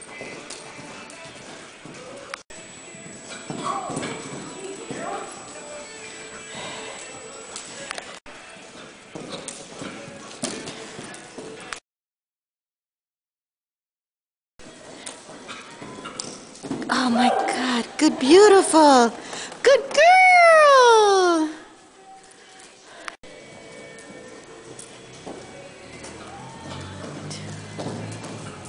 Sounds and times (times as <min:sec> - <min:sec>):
Clip-clop: 0:00.0 - 0:11.8, 0:14.7 - 0:20.1, 0:22.1 - 0:28.6
Speech: 0:16.9 - 0:21.6.